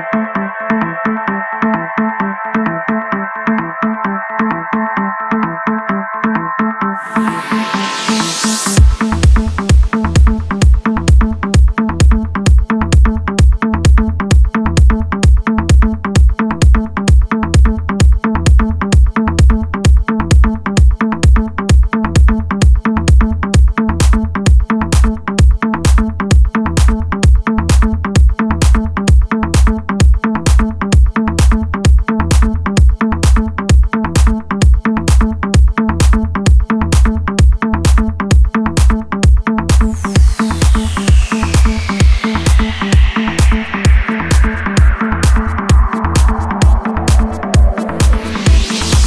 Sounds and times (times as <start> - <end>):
Music: 0.0 - 49.0.